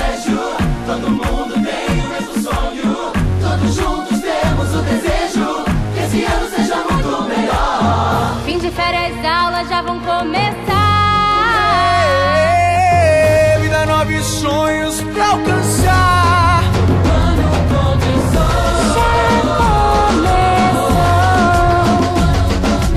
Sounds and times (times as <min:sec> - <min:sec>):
Music: 0:00.0 - 0:22.9.